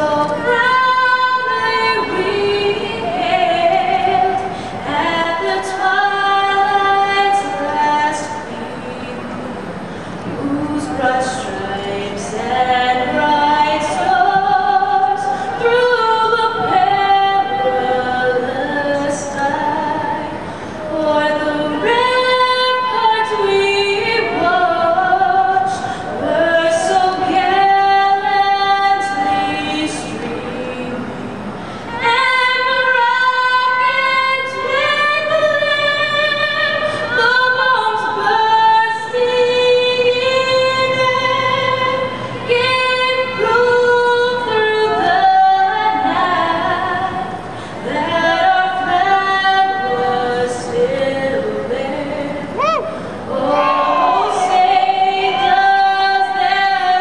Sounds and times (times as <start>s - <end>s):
Female singing: 0.0s - 9.3s, 10.3s - 31.1s, 31.9s - 57.0s.